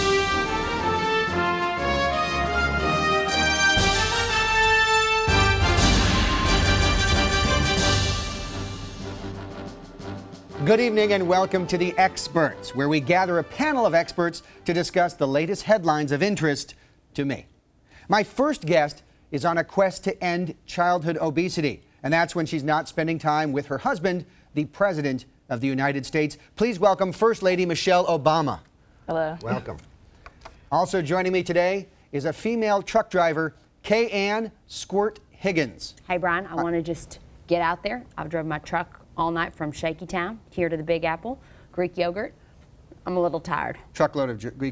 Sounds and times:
Speech: 29.1s - 29.8s.

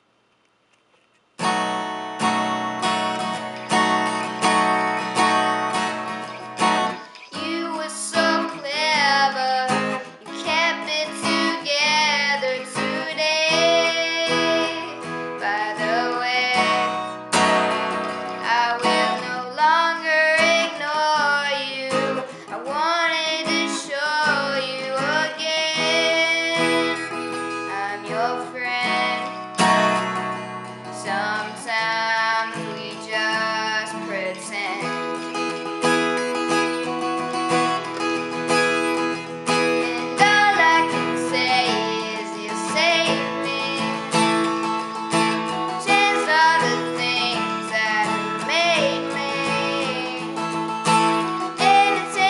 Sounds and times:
Music: 1.4s - 52.2s.

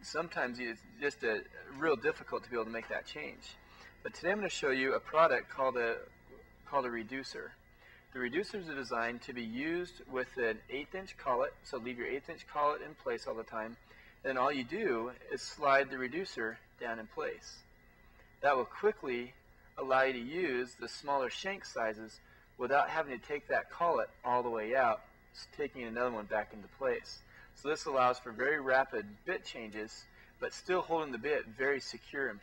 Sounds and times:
Speech: 0.0s - 6.1s, 6.7s - 7.6s, 8.2s - 17.6s, 18.4s - 32.4s.

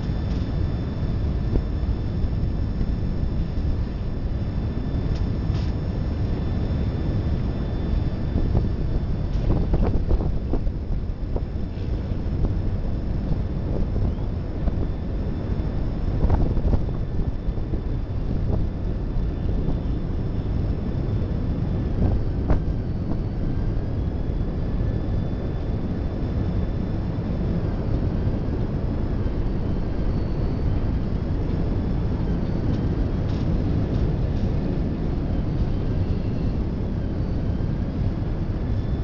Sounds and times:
Outside, urban or manmade: 0.0s - 39.0s
Train: 0.0s - 39.0s.

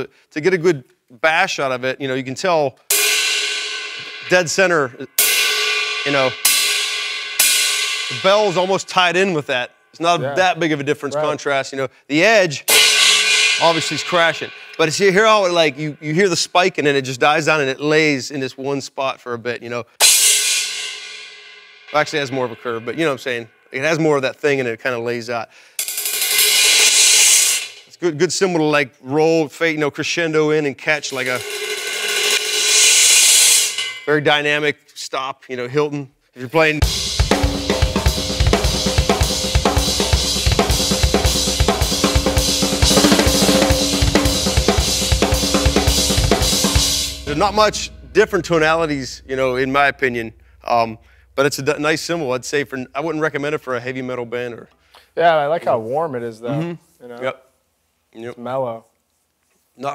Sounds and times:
Drum kit: 2.9s - 11.5s, 12.6s - 17.5s, 20.0s - 24.1s, 25.8s - 28.0s, 30.8s - 34.5s, 36.7s - 53.4s
Bass drum: 12.7s - 15.3s, 36.8s - 52.5s
Rimshot: 12.7s - 15.7s, 36.8s - 51.9s.

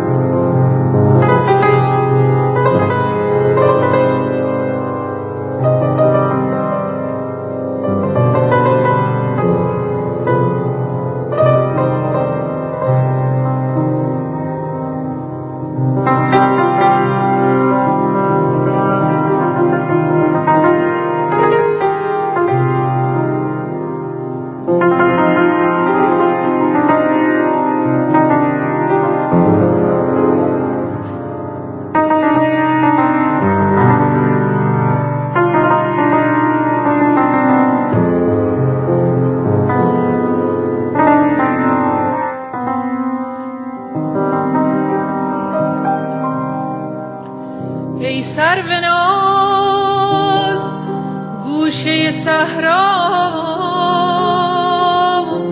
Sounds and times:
Music: 0.0s - 55.5s.

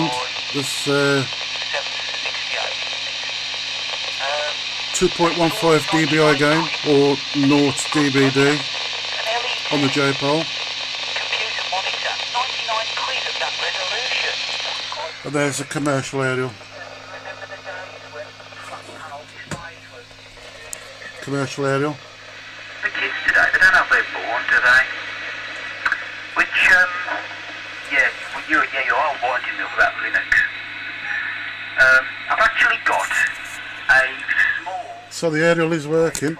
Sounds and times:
Speech: 0.0s - 1.3s, 4.2s - 10.5s, 15.2s - 16.6s, 21.2s - 22.0s, 27.9s - 30.5s, 31.8s - 36.3s
Radio: 0.0s - 36.3s.

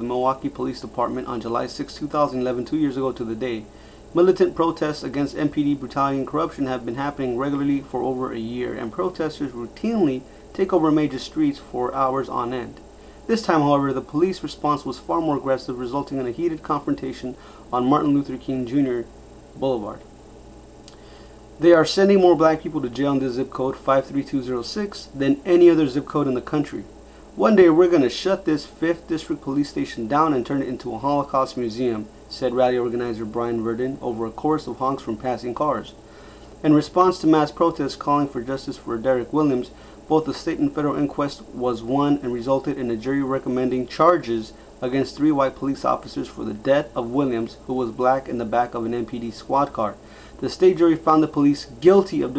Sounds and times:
Speech: 0.0s - 20.1s, 21.6s - 36.0s, 36.6s - 52.3s.

